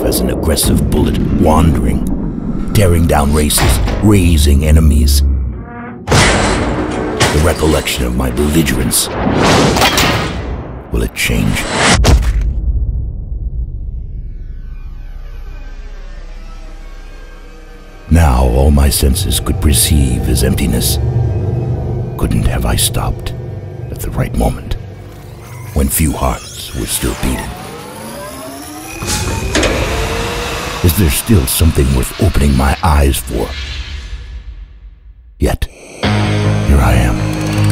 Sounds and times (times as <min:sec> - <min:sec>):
Speech: 0:00.0 - 0:02.1, 0:02.7 - 0:05.3, 0:07.2 - 0:09.1, 0:10.9 - 0:11.7, 0:18.1 - 0:21.0, 0:22.2 - 0:24.8, 0:25.7 - 0:27.6, 0:30.8 - 0:33.6, 0:35.4 - 0:35.8, 0:36.7 - 0:37.2
Music: 0:05.2 - 0:09.2, 0:12.6 - 0:31.0, 0:35.8 - 0:37.7.